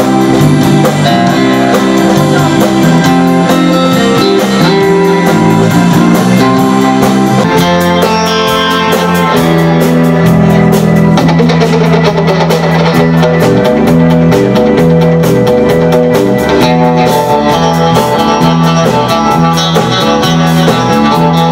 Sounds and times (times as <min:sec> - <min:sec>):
Music: 0:00.0 - 0:21.5.